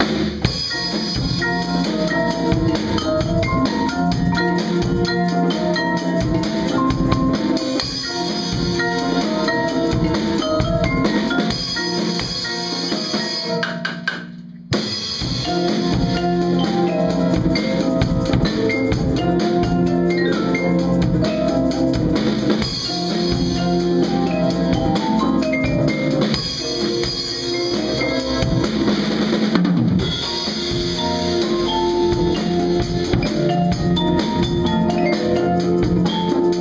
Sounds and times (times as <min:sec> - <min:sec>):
Glockenspiel: 0:00.5 - 0:13.8, 0:15.3 - 0:29.0, 0:30.1 - 0:36.6
Marimba, xylophone: 0:00.5 - 0:14.3, 0:15.1 - 0:29.2, 0:30.0 - 0:36.6.